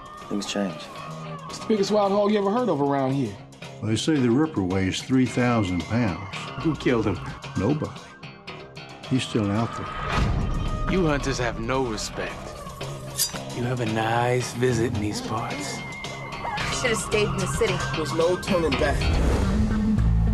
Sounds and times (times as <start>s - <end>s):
Music: 0.0s - 20.3s.